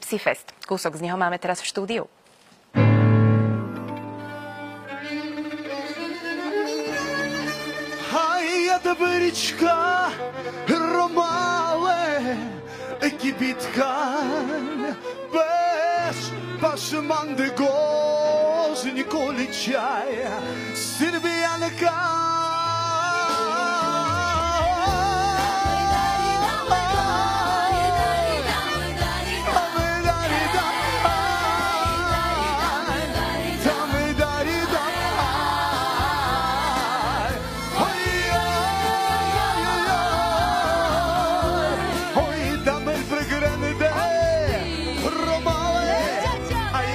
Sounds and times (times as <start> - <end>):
Bowed string instrument: 2.8 - 46.9.